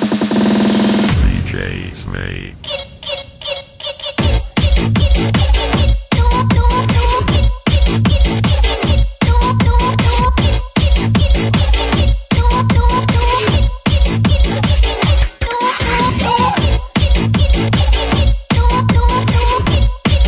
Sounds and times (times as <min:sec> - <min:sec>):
Music: 0:00.0 - 0:01.2, 0:02.6 - 0:20.2.